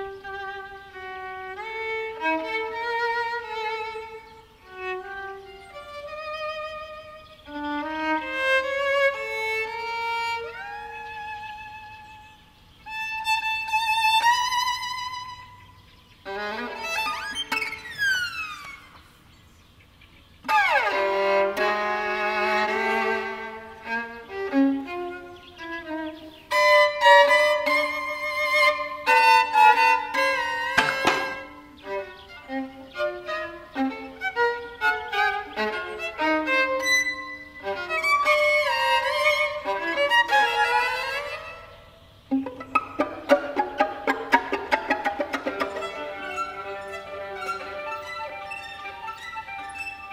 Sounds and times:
Violin, fiddle: 0.0 - 19.4, 20.4 - 50.1.

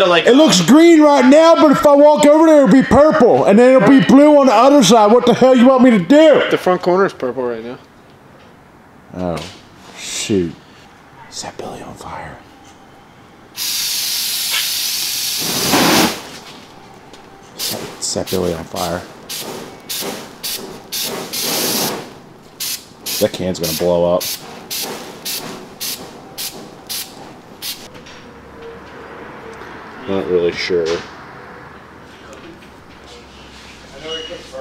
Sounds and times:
Speech: 0.0 - 7.8, 18.0 - 19.1, 23.2 - 24.2, 32.2 - 34.6.

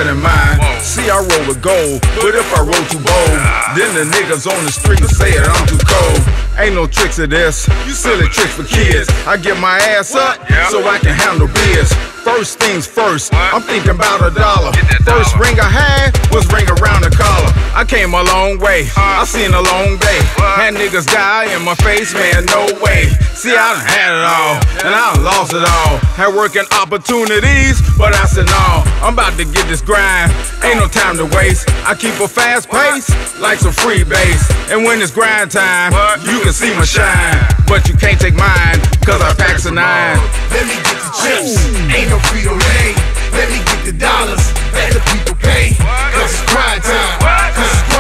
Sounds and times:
Music: 0.0 - 48.0.

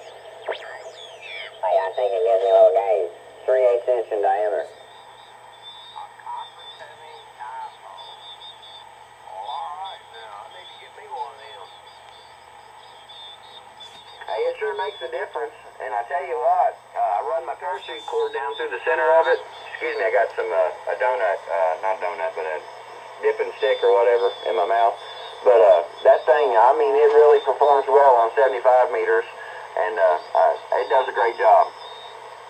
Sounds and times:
Radio: 0.0 - 32.4
Speech: 14.2 - 22.6, 23.2 - 31.7.

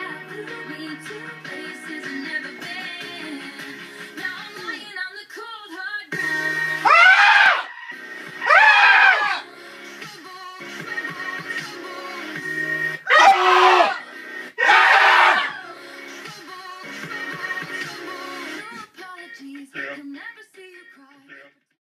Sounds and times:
Music: 0.0 - 21.8.

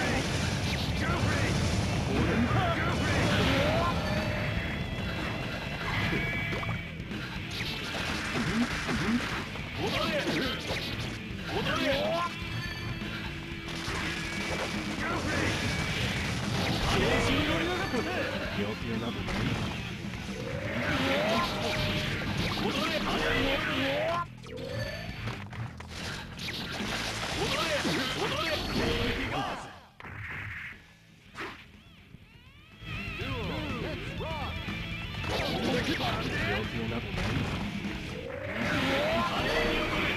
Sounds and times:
Music: 0.0 - 30.0, 30.7 - 40.1
Speech: 9.8 - 10.6, 35.4 - 37.4.

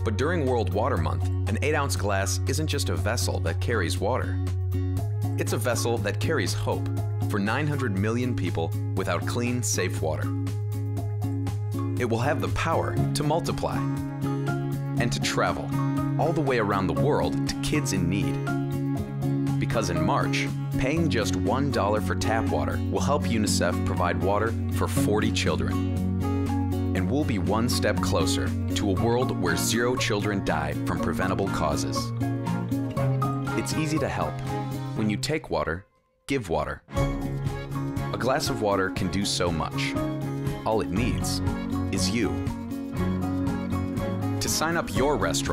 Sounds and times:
Speech: 0.0 - 4.4, 5.4 - 10.3, 12.0 - 13.9, 15.0 - 18.4, 19.6 - 25.8, 27.0 - 32.1, 33.6 - 34.4, 35.0 - 36.9, 38.2 - 40.0, 40.6 - 41.4, 42.0 - 42.4, 44.4 - 45.5
Music: 0.0 - 45.5.

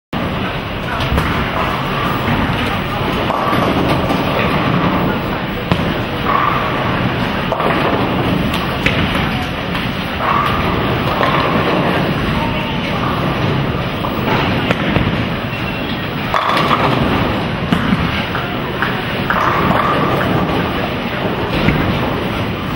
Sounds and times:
Speech: 0.2 - 21.6.

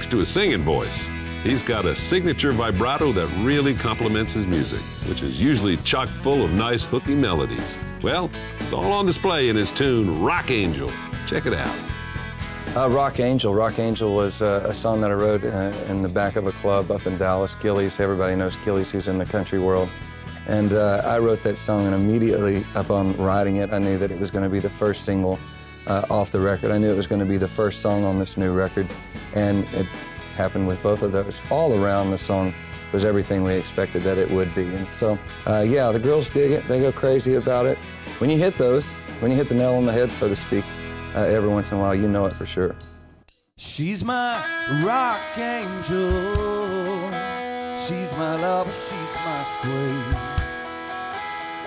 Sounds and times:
Speech: 0.0 - 11.9, 12.8 - 42.8, 43.6 - 44.1
Music: 0.0 - 51.6.

